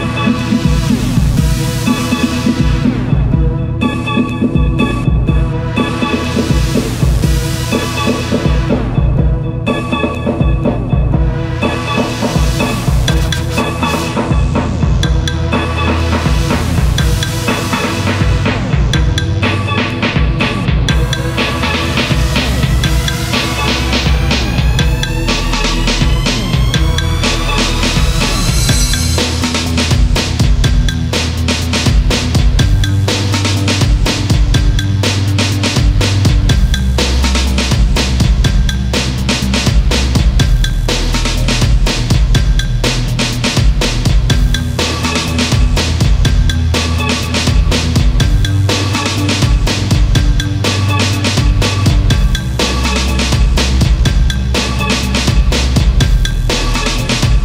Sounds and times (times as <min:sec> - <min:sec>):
Music: 0:00.0 - 0:57.4.